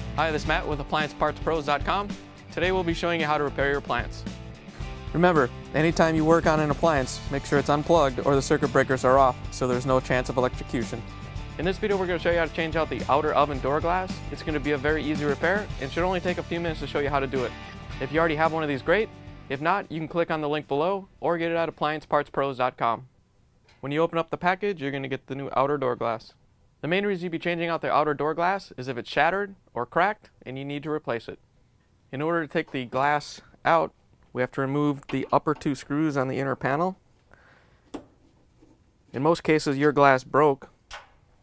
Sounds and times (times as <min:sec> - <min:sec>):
Speech: 0:00.2 - 0:04.2, 0:05.1 - 0:23.1, 0:23.8 - 0:31.4, 0:32.1 - 0:37.0, 0:39.1 - 0:40.7.